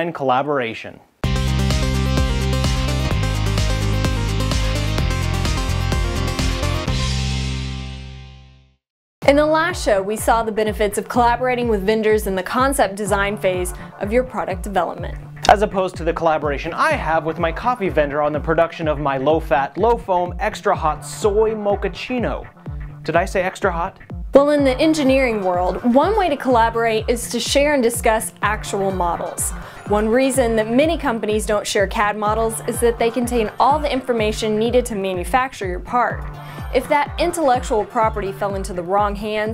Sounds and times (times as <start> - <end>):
Speech: 0.0 - 1.1, 9.2 - 22.5, 23.1 - 36.2, 36.8 - 39.5
Music: 1.2 - 39.5.